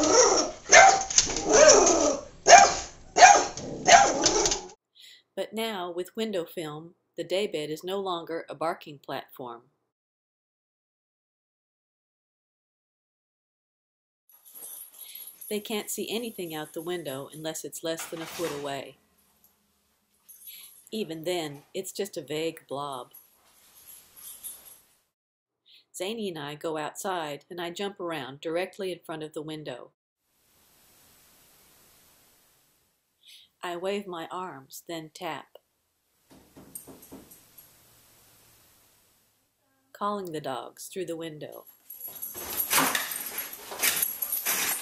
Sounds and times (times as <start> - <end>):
Speech: 5.4 - 9.6, 15.5 - 19.0, 21.0 - 23.1, 26.0 - 29.9, 33.6 - 35.6, 39.9 - 41.7.